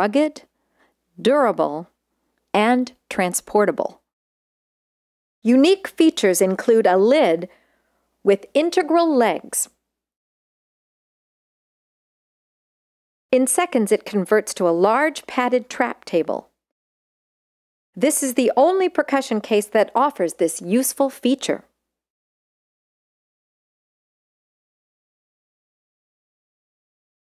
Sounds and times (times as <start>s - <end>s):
Speech: 0.0s - 0.5s, 1.2s - 4.0s, 5.4s - 7.6s, 8.2s - 9.8s, 13.4s - 16.5s, 18.0s - 21.7s.